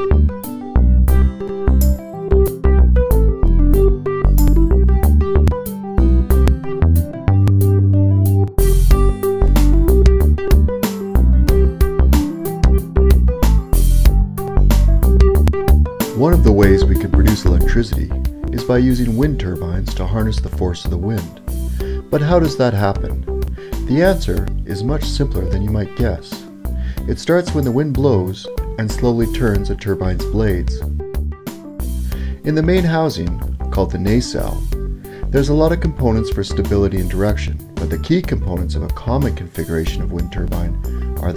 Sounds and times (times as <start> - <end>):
Music: 0.0 - 41.3
Speech: 16.2 - 21.4, 22.1 - 23.2, 23.8 - 26.5, 27.1 - 30.8, 32.4 - 34.7, 35.3 - 41.3.